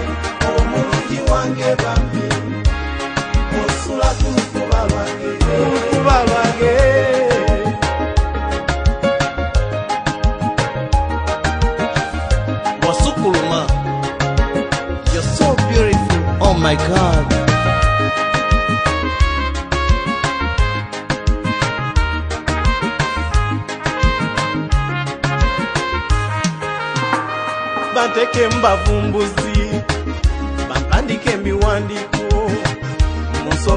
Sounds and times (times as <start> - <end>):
Music of Africa: 0.0 - 33.7
Singing: 0.4 - 2.6, 3.5 - 7.8.